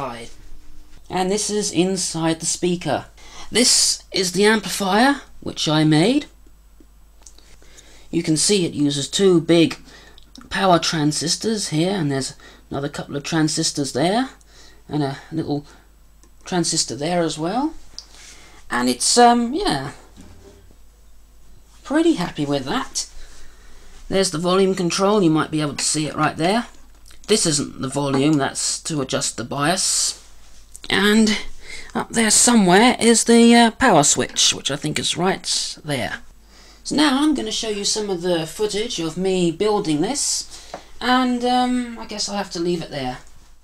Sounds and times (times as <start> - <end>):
Speech: 0.0 - 0.4, 1.1 - 6.4, 8.1 - 15.8, 16.4 - 17.8, 18.7 - 20.1, 21.8 - 23.2, 24.1 - 43.3
Inside, small room: 0.0 - 43.6.